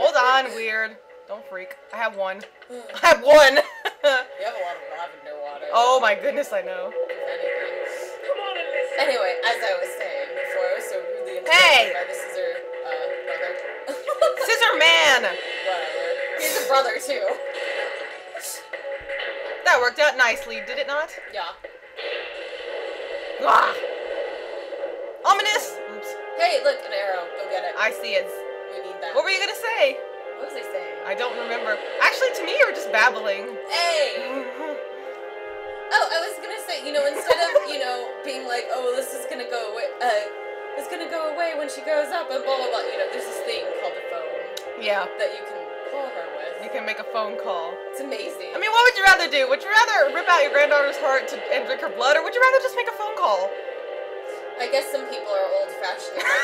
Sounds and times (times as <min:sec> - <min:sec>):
Speech: 0:00.0 - 0:17.4, 0:25.3 - 0:34.6, 0:35.9 - 0:53.5, 0:54.6 - 0:56.3.